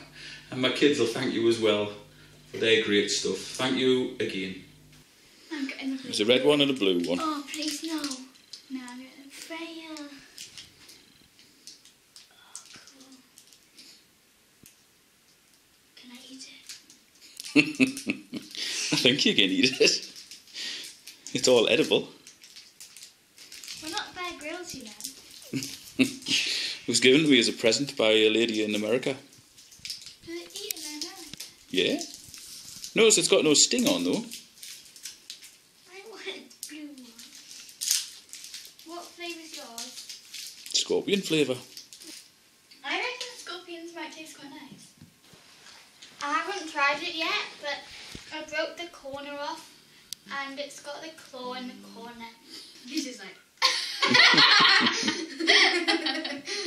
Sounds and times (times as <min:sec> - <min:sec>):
Child speech, kid speaking: 0:05.5 - 0:06.2, 0:06.9 - 0:10.3, 0:16.0 - 0:16.7, 0:23.8 - 0:25.2, 0:30.3 - 0:32.1, 0:35.9 - 0:37.3, 0:38.8 - 0:40.0, 0:42.8 - 0:44.9, 0:46.2 - 0:49.7, 0:50.3 - 0:53.4.